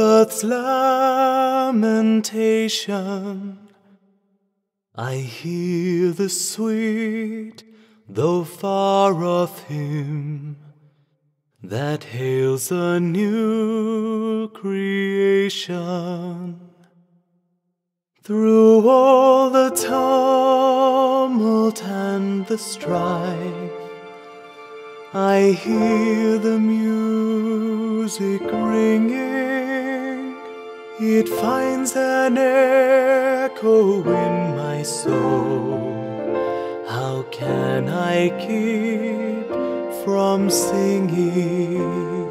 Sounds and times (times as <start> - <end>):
Male singing: 0.0 - 3.8, 5.0 - 10.7, 11.6 - 16.8, 18.2 - 24.1, 25.1 - 42.3
Music: 0.0 - 17.6, 18.2 - 42.3.